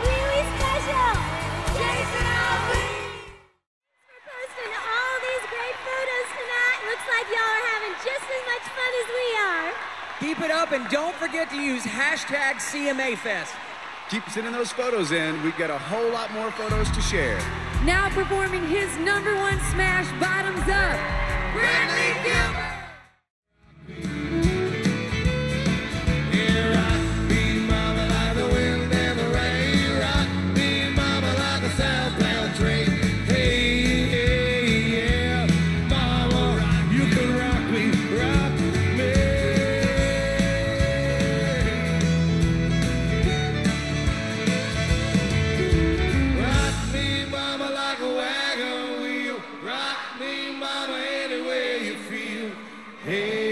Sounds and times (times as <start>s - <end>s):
Exciting music: 0.0s - 3.6s, 16.2s - 23.1s, 23.7s - 48.5s.